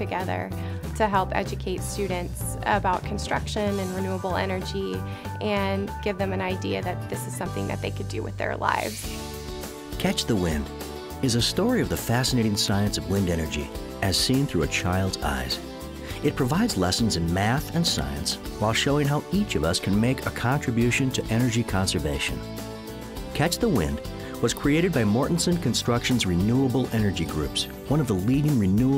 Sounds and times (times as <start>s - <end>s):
Speech: 0.0s - 9.0s, 10.0s - 15.6s, 16.2s - 22.4s, 23.4s - 28.9s
Music: 0.0s - 28.9s.